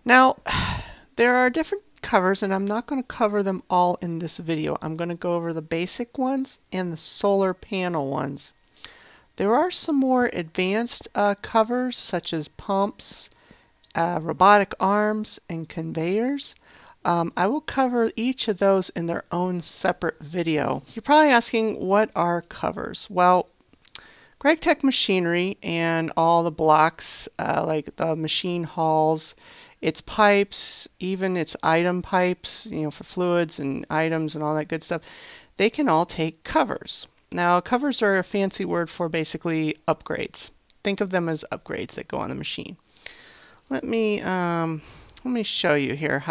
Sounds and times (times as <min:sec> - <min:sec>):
Speech: 0:00.0 - 0:00.5, 0:01.2 - 0:08.6, 0:09.4 - 0:13.3, 0:13.9 - 0:23.5, 0:24.4 - 0:35.0, 0:35.6 - 0:42.8, 0:43.7 - 0:46.3.